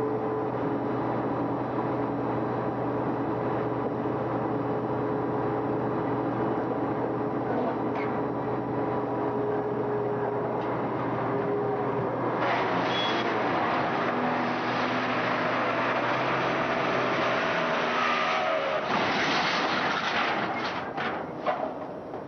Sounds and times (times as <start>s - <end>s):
Vehicle: 0.0s - 22.2s.